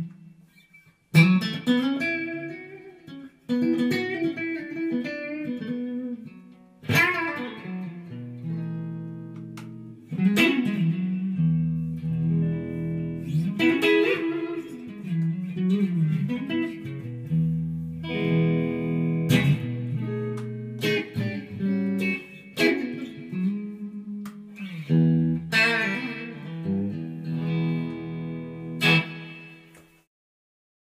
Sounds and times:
Electric guitar: 0.0 - 30.1.

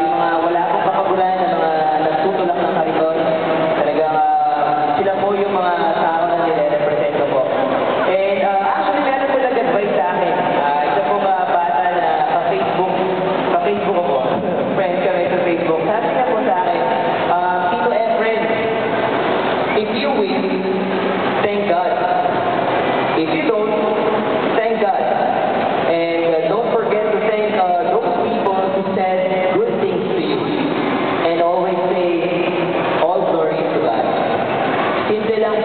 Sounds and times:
Male speech, man speaking: 0.0 - 18.8, 19.7 - 20.8, 21.4 - 22.3, 23.2 - 25.3, 25.9 - 30.6, 31.2 - 34.3, 35.1 - 35.6
Narration, monologue: 0.0 - 35.6.

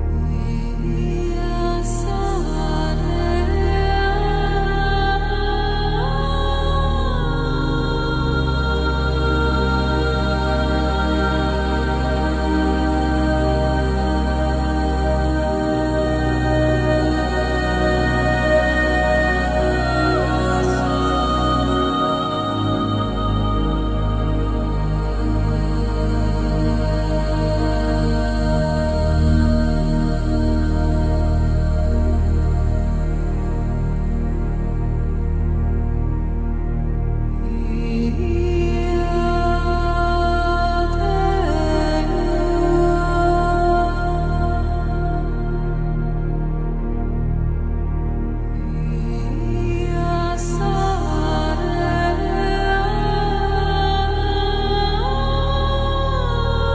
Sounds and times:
Singing: 0.0 - 33.7, 37.4 - 46.7, 48.6 - 56.7
Background music: 0.0 - 56.7
New-age music: 0.0 - 56.7.

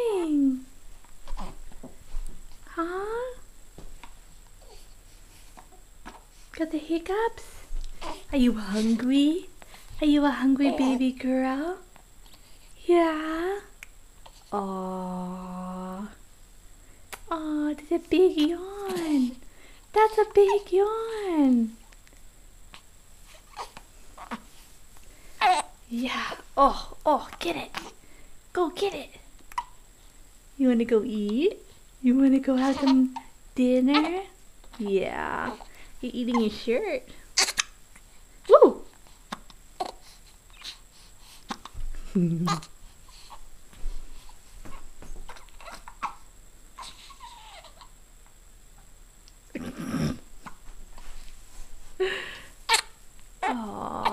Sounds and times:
Speech: 0.0 - 0.7, 2.7 - 3.4, 6.6 - 7.5, 8.3 - 11.9, 12.8 - 13.7, 14.5 - 16.2, 17.3 - 21.8, 25.9 - 27.9, 28.5 - 29.3, 30.6 - 37.1, 53.4 - 54.1.

